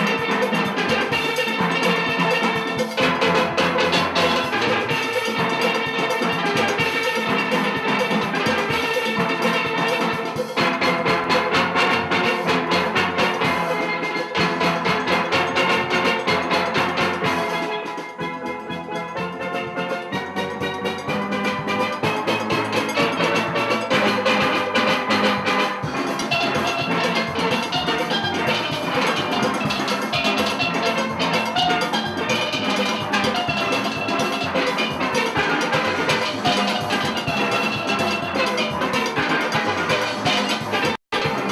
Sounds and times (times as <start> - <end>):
Steelpan: 0.0 - 41.5.